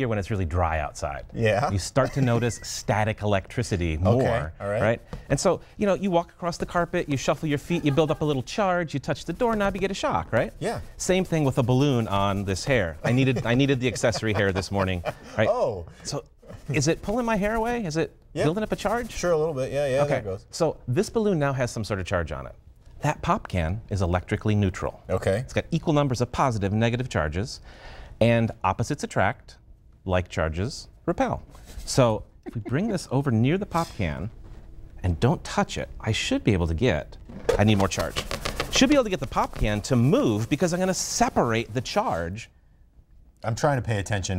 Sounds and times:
Speech: 0.0 - 27.6.

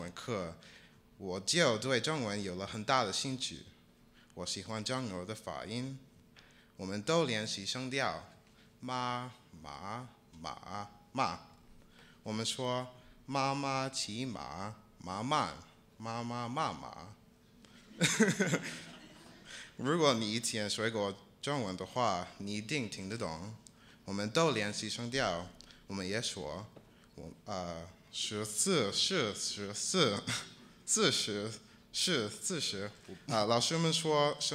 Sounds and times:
Male speech, man speaking: 0.0 - 0.6, 1.2 - 3.8, 4.4 - 6.0, 6.8 - 11.5, 12.3 - 17.2, 19.8 - 34.5.

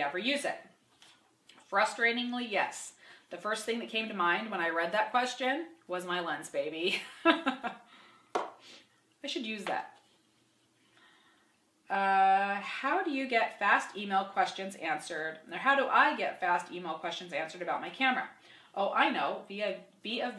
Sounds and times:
Speech: 0.0 - 0.7, 1.7 - 6.9, 9.2 - 10.0, 11.9 - 20.3
Inside, small room: 0.0 - 20.3.

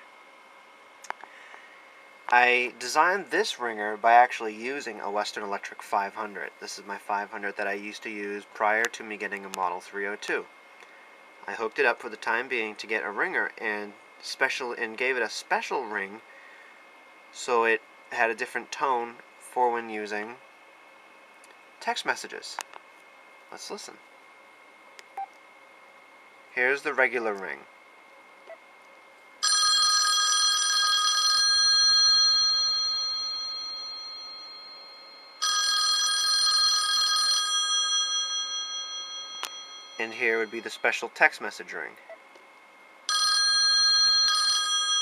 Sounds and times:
Speech: 2.3 - 10.5, 11.4 - 16.2, 17.4 - 20.4, 21.8 - 22.6, 23.5 - 24.0, 26.5 - 27.7, 40.0 - 42.0
Telephone: 29.4 - 40.8, 43.1 - 45.0.

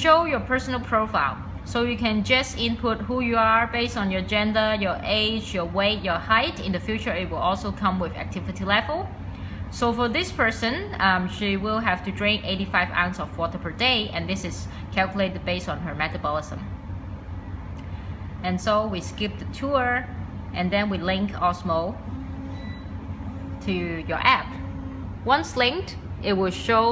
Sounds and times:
Speech: 0.0 - 9.1, 9.8 - 16.7, 18.4 - 22.0, 23.6 - 24.6, 25.3 - 26.9.

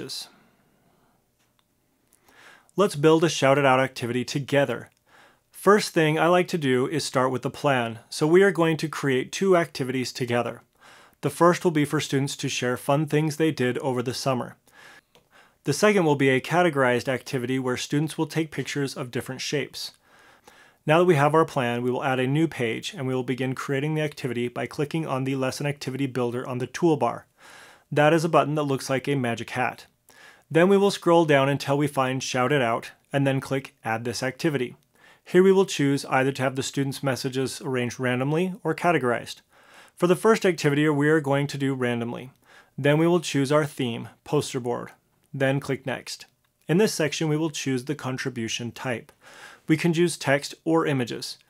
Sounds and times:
Speech: 0.0 - 0.4, 2.8 - 5.0, 5.6 - 14.6, 15.6 - 20.0, 20.8 - 27.3, 27.9 - 49.1, 49.7 - 51.5.

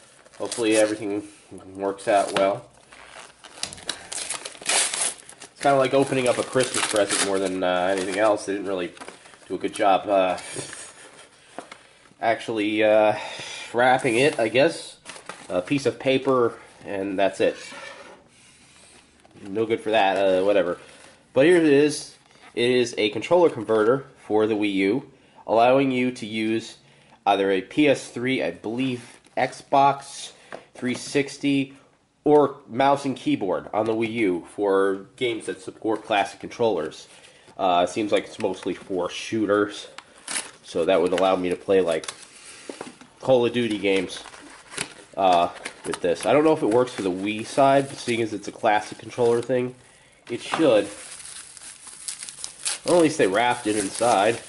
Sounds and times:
Speech: 0.4 - 2.7, 5.6 - 10.8, 12.2 - 17.7, 19.4 - 20.8, 21.4 - 40.0, 40.6 - 42.1, 43.2 - 44.3, 45.2 - 51.0, 52.8 - 54.4.

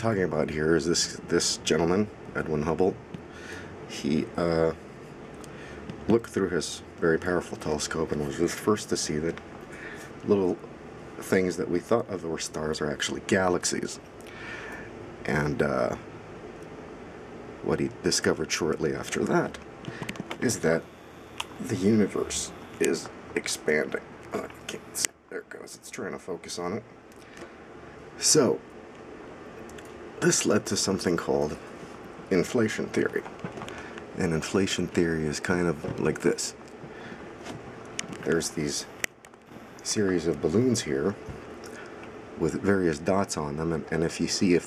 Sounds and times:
Speech: 0.0 - 3.0, 3.9 - 4.8, 6.0 - 9.4, 10.2 - 14.0, 15.2 - 16.1, 17.6 - 19.6, 20.4 - 20.9, 21.6 - 26.9, 28.2 - 28.6, 30.2 - 31.7, 32.3 - 33.3, 34.2 - 36.6, 38.2 - 38.9, 39.8 - 41.3, 42.4 - 44.6.

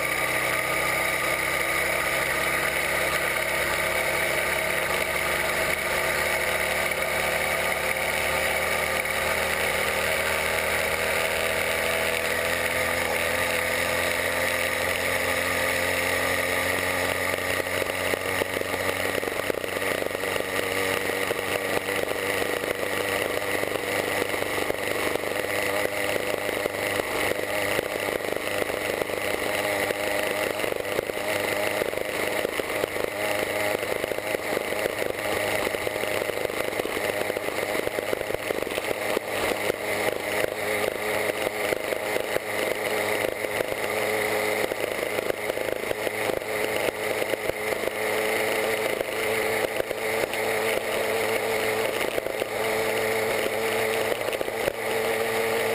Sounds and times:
Vehicle: 0.0 - 55.7.

